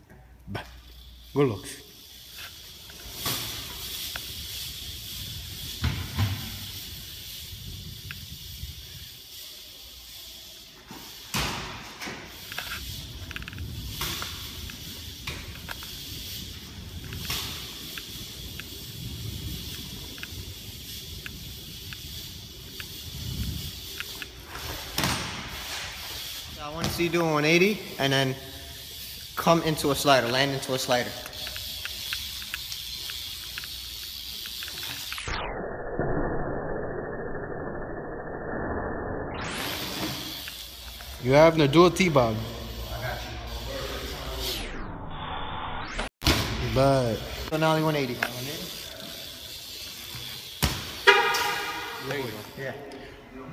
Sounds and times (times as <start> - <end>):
Inside, large room or hall: 0.0 - 35.1, 39.6 - 44.6, 46.3 - 53.5
Bicycle: 0.0 - 38.0, 39.3 - 44.9, 45.8 - 53.5.